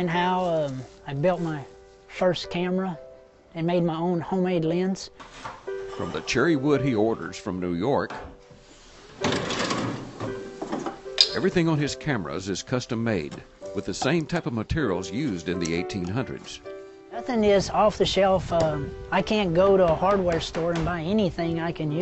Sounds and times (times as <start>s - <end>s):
Speech: 0.0s - 3.0s, 3.6s - 5.1s, 6.0s - 8.2s, 11.3s - 16.6s, 17.2s - 22.0s
Music: 0.0s - 22.0s.